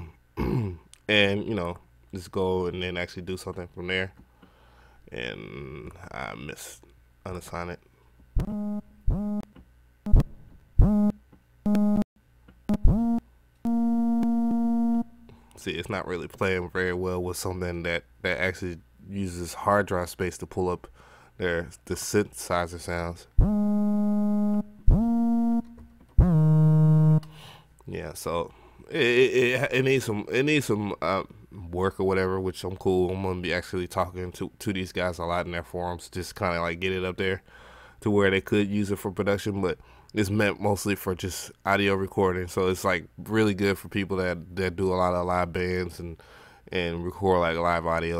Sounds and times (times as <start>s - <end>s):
Speech: 0.0s - 4.2s, 5.1s - 7.8s, 15.6s - 23.3s, 27.8s - 37.4s, 38.0s - 48.1s.